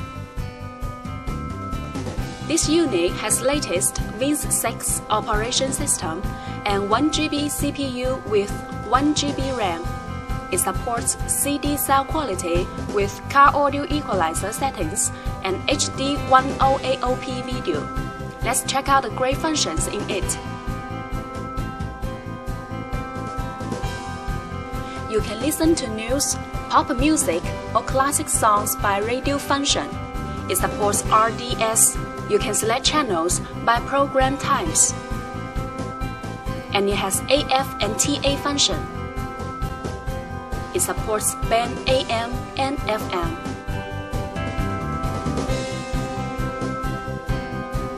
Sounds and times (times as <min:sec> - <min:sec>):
Music: 0:00.0 - 0:47.9
Speech: 0:02.5 - 0:09.9, 0:10.5 - 0:20.4, 0:25.1 - 0:29.9, 0:30.5 - 0:34.9, 0:36.8 - 0:38.8, 0:40.8 - 0:43.4.